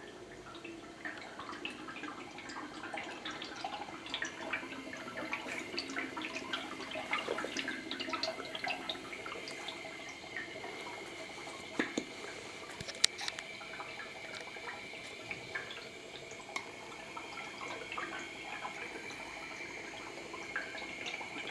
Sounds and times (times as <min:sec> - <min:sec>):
Inside, small room: 0:00.0 - 0:21.5.